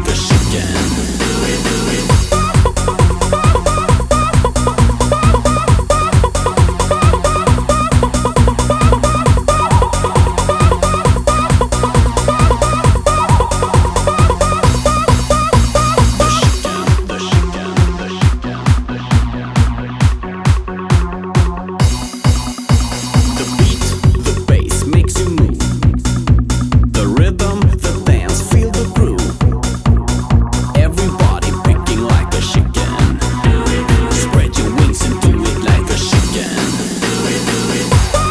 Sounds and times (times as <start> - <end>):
Techno: 0.0 - 38.3
Trance music: 0.0 - 38.3.